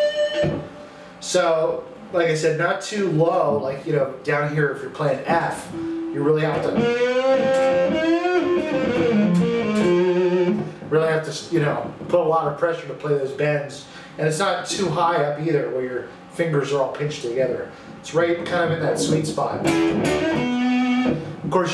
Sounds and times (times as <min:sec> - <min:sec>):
Electric guitar: 0:00.0 - 0:01.0, 0:05.6 - 0:10.9, 0:18.6 - 0:21.5
Speech: 0:01.2 - 0:06.9, 0:10.9 - 0:19.7, 0:21.5 - 0:21.7
Strum: 0:05.3 - 0:10.9, 0:18.4 - 0:21.7.